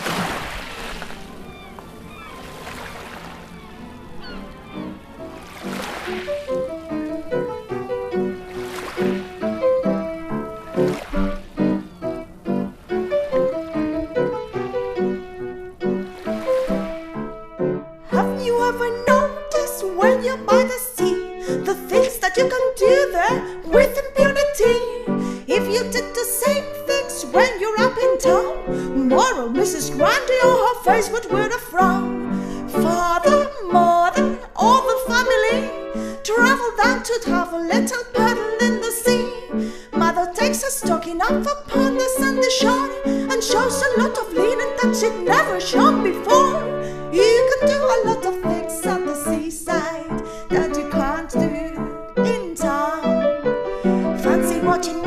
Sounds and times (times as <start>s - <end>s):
Music: 0.6s - 55.0s.